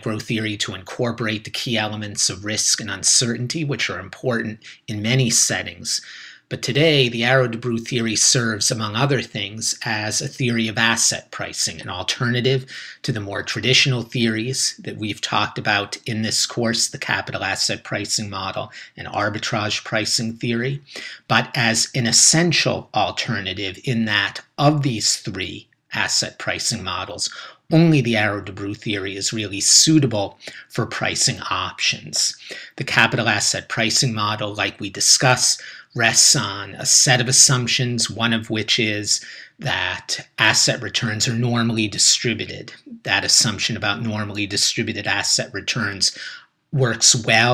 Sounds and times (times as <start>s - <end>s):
Speech: 0.0s - 47.5s.